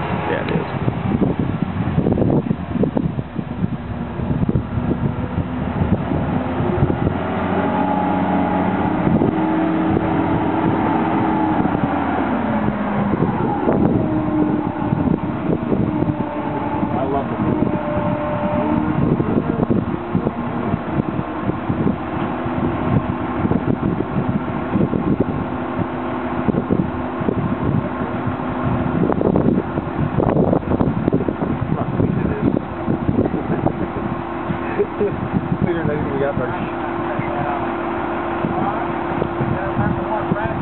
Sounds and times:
Vehicle: 0.0s - 40.6s
Speech: 0.2s - 0.7s, 17.0s - 17.5s, 35.6s - 37.7s, 39.5s - 40.6s.

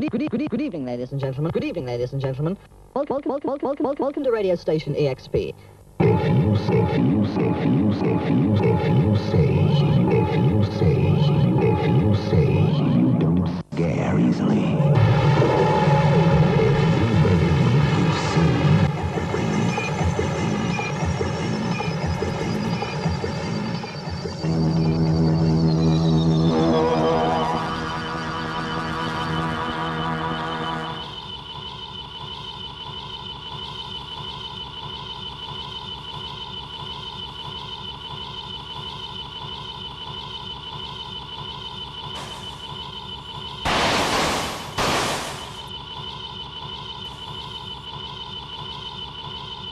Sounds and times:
Sampler: 14.7s - 33.4s, 42.1s - 45.8s.

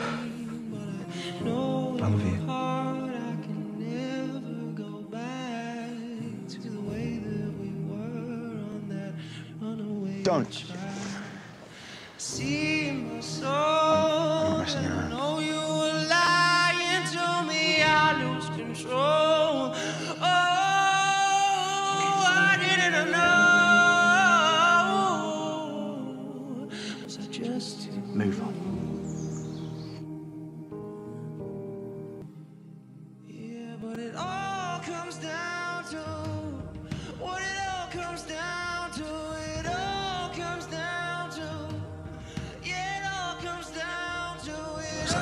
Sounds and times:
Music: 0.0s - 45.2s
Speech: 2.0s - 2.5s, 10.2s - 10.8s, 14.0s - 15.2s, 28.1s - 28.6s.

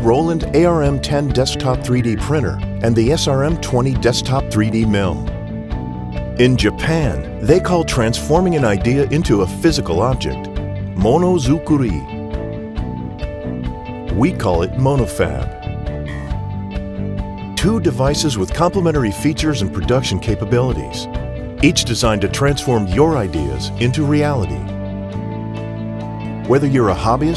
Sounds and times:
Speech: 0.0s - 5.3s, 6.4s - 12.0s, 14.1s - 15.6s, 17.6s - 21.0s, 21.6s - 24.7s, 26.5s - 27.3s
Music: 0.0s - 27.3s.

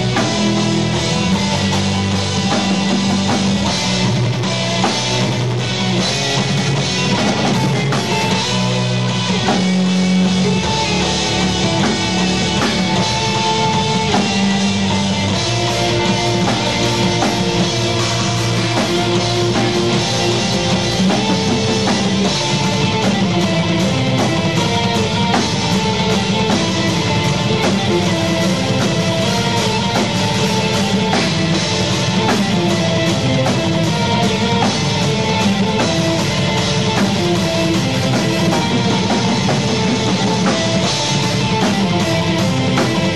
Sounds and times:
Bass drum: 0.0s - 43.1s
Drum kit: 0.0s - 43.1s
Drum roll: 0.0s - 43.1s.

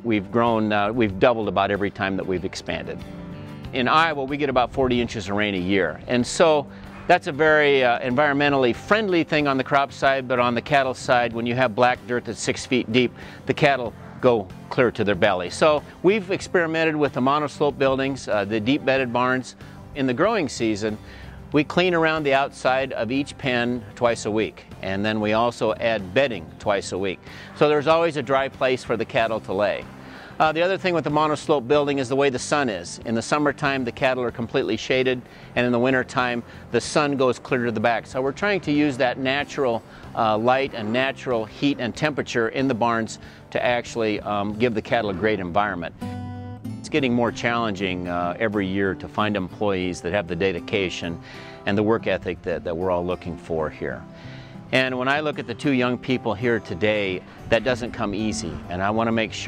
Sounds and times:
Speech: 0.0s - 3.0s, 3.8s - 29.8s, 30.4s - 45.9s, 46.8s - 54.0s, 54.7s - 59.4s
Music: 0.0s - 59.4s.

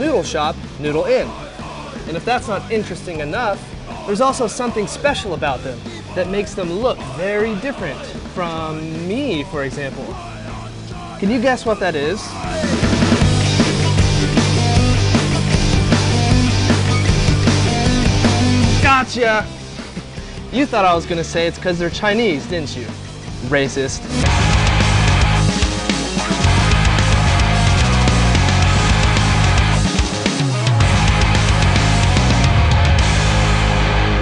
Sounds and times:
Speech: 0.0s - 1.4s, 2.1s - 10.2s, 11.2s - 12.7s, 18.8s - 19.5s, 20.5s - 24.1s
Music: 0.0s - 34.2s.

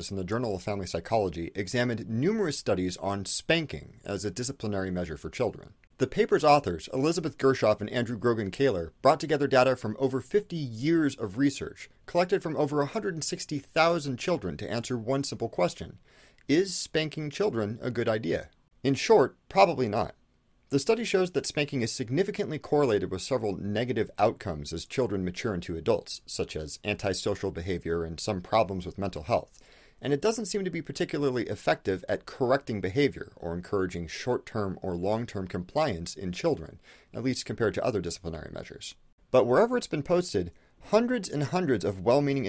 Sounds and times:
Speech: 0.0s - 42.4s.

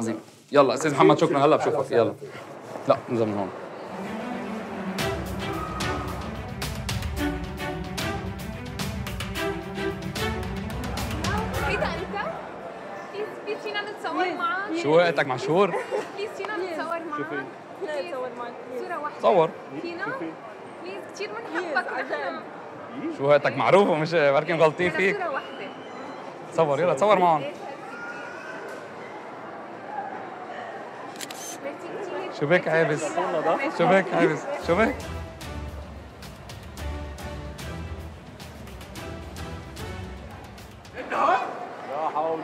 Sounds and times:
Music: 3.8s - 12.4s, 34.6s - 41.0s.

